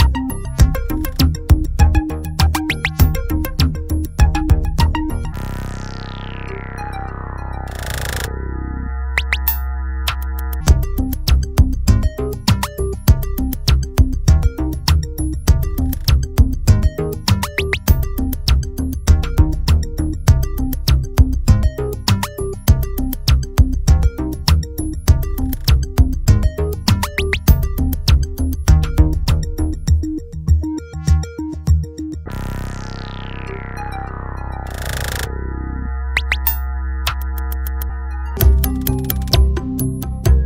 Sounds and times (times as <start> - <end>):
Synthesizer: 0.0 - 40.4.